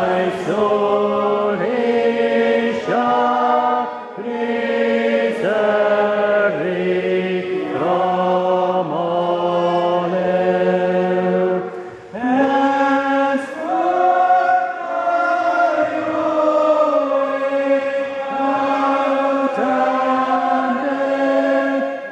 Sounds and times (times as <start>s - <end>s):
Chant: 0.0s - 22.1s
Choir: 0.0s - 22.1s.